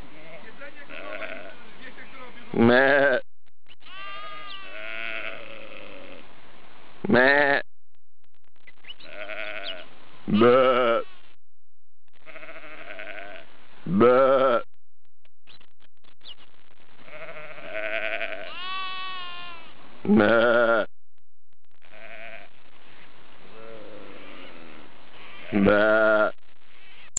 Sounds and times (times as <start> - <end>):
Bleat: 0.2 - 1.6, 2.6 - 3.2, 3.8 - 6.2, 7.1 - 7.6, 9.0 - 11.1, 12.2 - 14.6, 17.0 - 20.9, 21.9 - 22.6, 23.5 - 27.0.